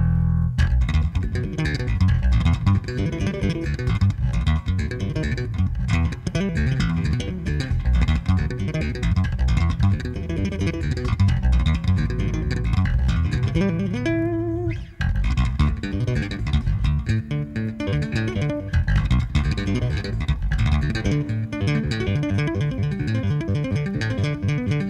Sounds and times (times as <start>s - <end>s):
Guitar: 0.0s - 24.9s.